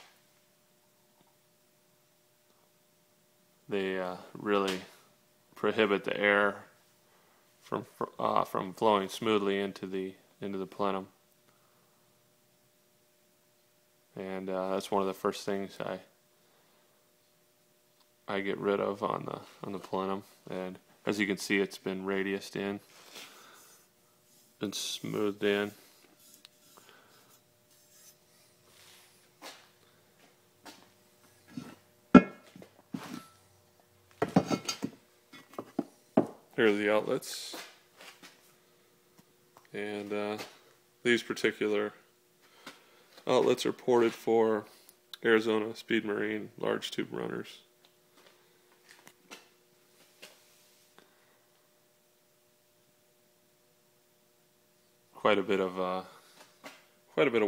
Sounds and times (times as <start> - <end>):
Speech: 3.7 - 5.0, 5.6 - 6.7, 7.7 - 11.2, 14.2 - 16.1, 18.3 - 22.8, 24.6 - 25.8, 36.6 - 37.7, 39.7 - 42.1, 43.2 - 47.7, 55.2 - 56.2, 57.1 - 57.4.